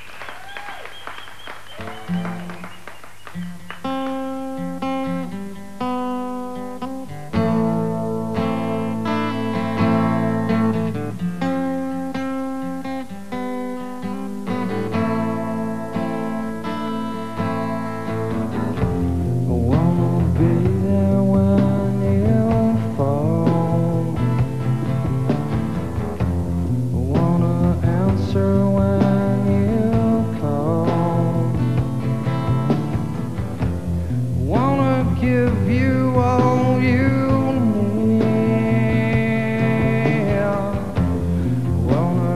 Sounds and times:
Music: 1.5 - 42.3.

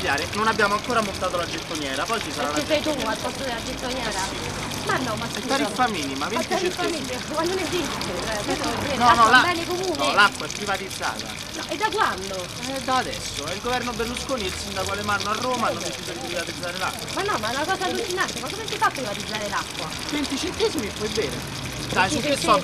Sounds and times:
Water: 0.0 - 22.6.

